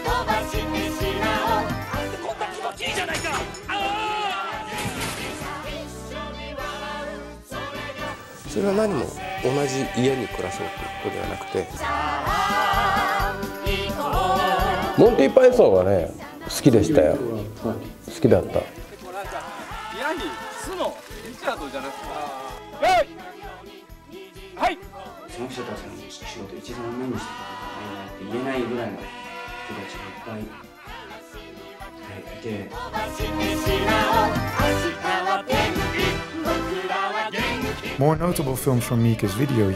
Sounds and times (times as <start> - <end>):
Music: 0.0 - 39.7.